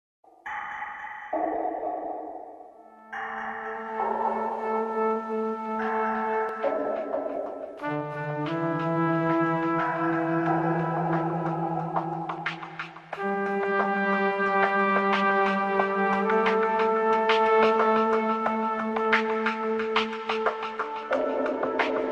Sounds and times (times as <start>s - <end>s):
Trombone: 4.0s - 11.5s, 13.1s - 22.1s.